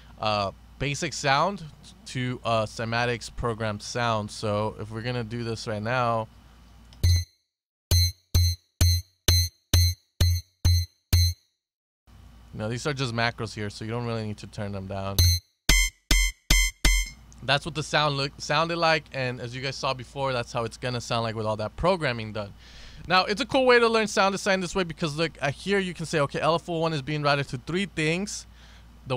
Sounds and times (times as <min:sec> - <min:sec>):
Speech: 0:00.2 - 0:06.3, 0:12.5 - 0:15.2, 0:17.4 - 0:28.5.